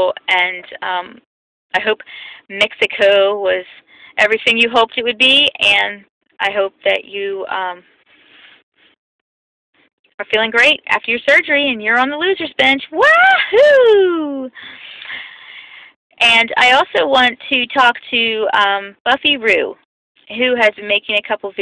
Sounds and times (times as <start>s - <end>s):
Speech: 0.0s - 1.2s, 1.8s - 7.8s, 10.2s - 14.5s, 16.2s - 21.6s
Whoop: 13.0s - 14.5s.